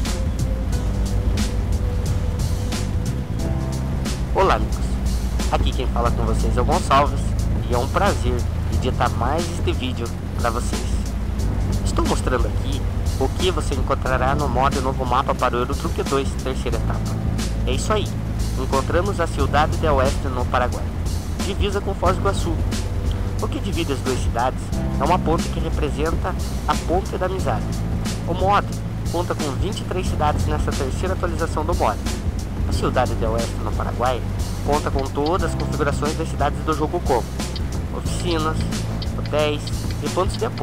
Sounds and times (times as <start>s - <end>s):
Music: 0.0s - 40.6s
Vehicle: 0.0s - 40.6s
Speech: 4.4s - 11.1s, 11.8s - 17.1s, 17.7s - 22.6s, 23.4s - 27.7s, 28.3s - 32.0s, 32.7s - 37.3s, 37.9s - 40.6s.